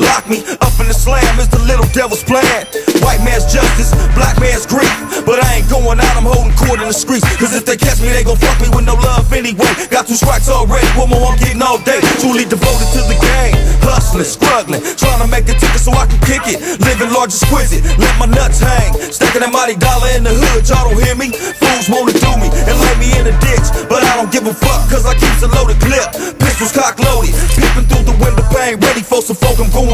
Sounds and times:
Music: 0:00.0 - 0:29.9.

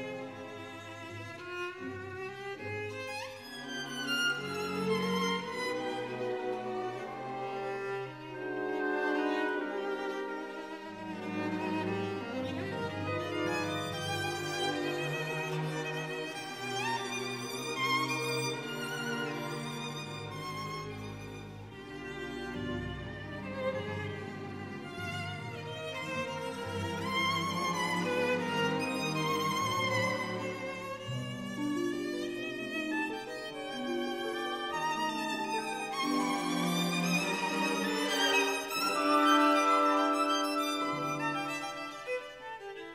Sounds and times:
Violin, fiddle: 0:00.0 - 0:42.9.

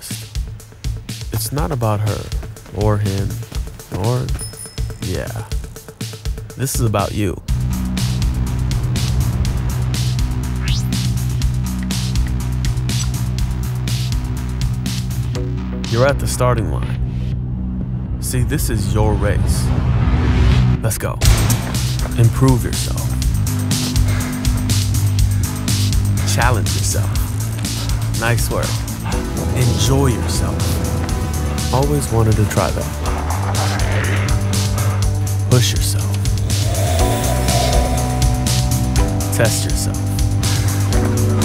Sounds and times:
Speech: 0:00.0 - 0:00.3, 0:01.3 - 0:04.4, 0:05.0 - 0:05.6, 0:06.6 - 0:07.5, 0:15.9 - 0:17.0, 0:18.2 - 0:19.7, 0:20.8 - 0:21.3, 0:22.1 - 0:23.2, 0:26.2 - 0:27.3, 0:28.2 - 0:28.8, 0:29.4 - 0:30.8, 0:31.7 - 0:33.0, 0:35.5 - 0:36.2, 0:39.3 - 0:40.2
Music: 0:00.0 - 0:41.4.

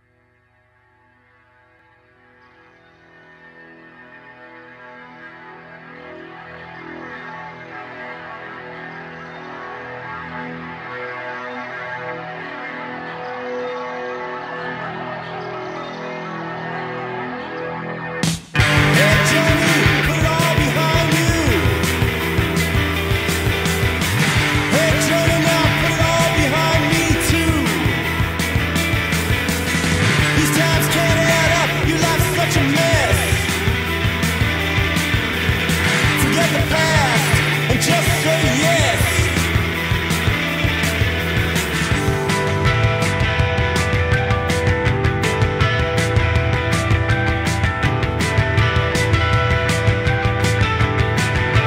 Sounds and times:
Music: 0:00.0 - 0:51.6.

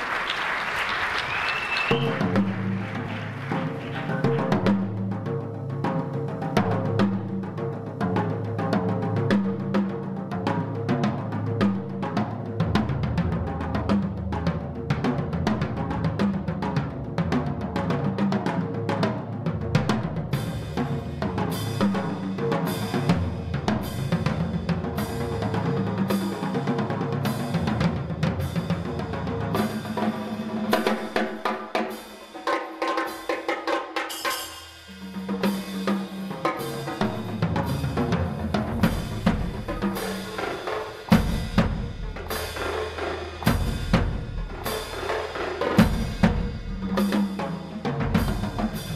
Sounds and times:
Drum kit: 0:00.0 - 0:48.9
Drum roll: 0:00.0 - 0:48.9.

